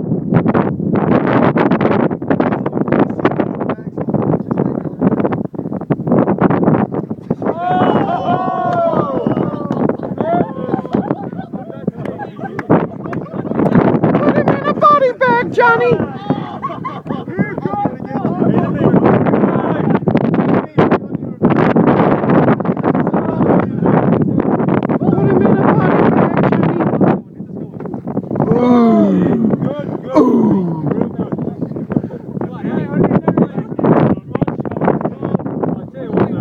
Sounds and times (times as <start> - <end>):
Speech: 17.4 - 20.0, 32.4 - 36.4.